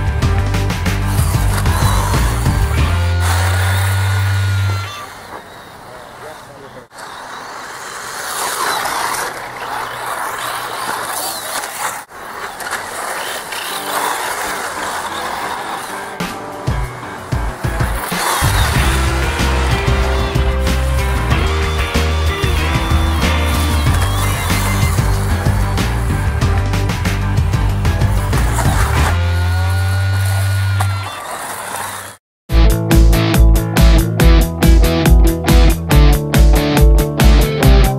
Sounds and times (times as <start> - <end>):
Music: 0.0 - 4.6, 16.0 - 30.0, 32.5 - 37.9
Speech: 5.9 - 7.0.